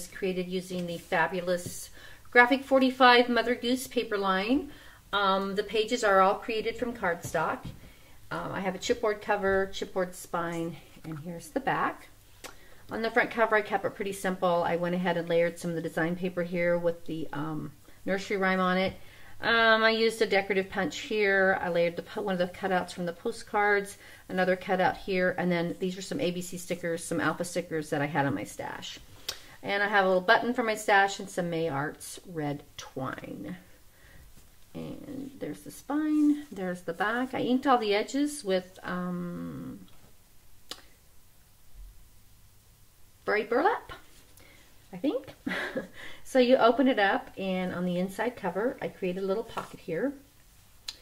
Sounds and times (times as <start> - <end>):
Speech: 0.0 - 12.1, 12.9 - 29.0, 29.6 - 33.7, 34.7 - 39.9, 43.2 - 44.1, 44.9 - 45.4, 46.3 - 50.3.